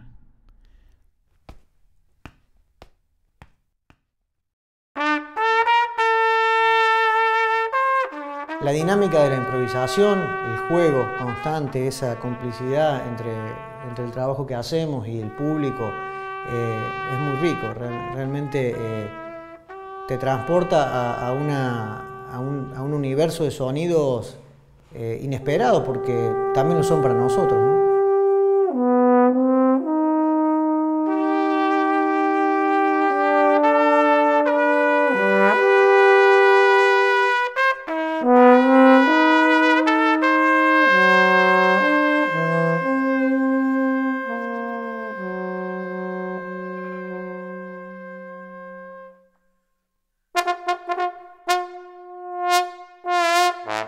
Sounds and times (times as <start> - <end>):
Trumpet: 5.0 - 49.5, 50.3 - 53.8.